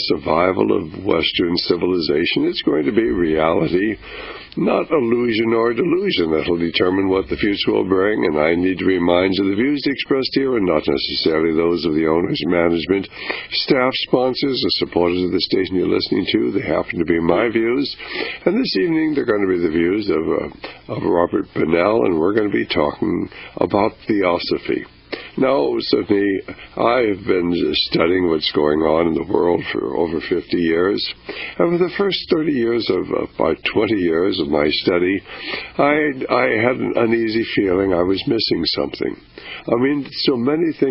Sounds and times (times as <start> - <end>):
Speech: 0.0 - 40.9.